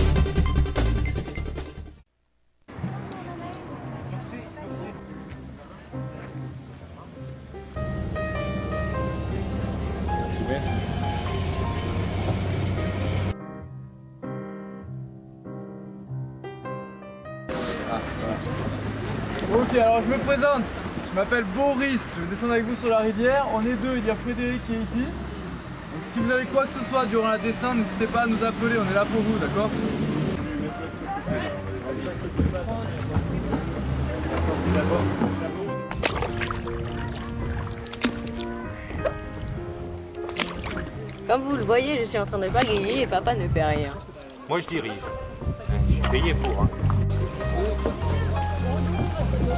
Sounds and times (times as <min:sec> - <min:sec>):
Music: 0:00.0 - 0:02.1, 0:02.7 - 0:20.7, 0:25.9 - 0:49.5.